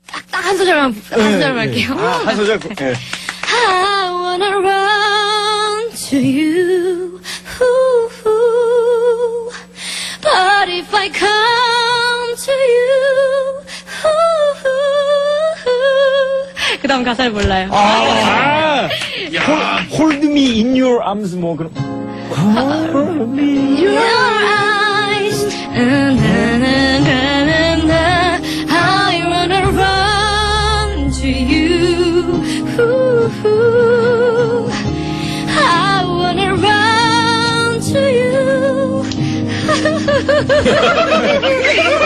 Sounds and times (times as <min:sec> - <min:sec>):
Female singing: 0:03.5 - 0:09.5, 0:10.2 - 0:16.4, 0:22.4 - 0:34.7, 0:35.6 - 0:39.0
Music: 0:19.8 - 0:42.0.